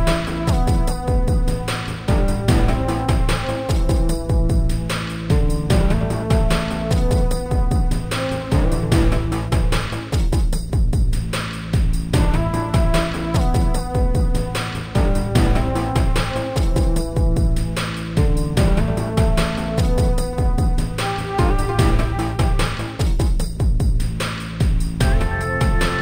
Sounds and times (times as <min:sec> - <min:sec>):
Music: 0:00.0 - 0:26.0.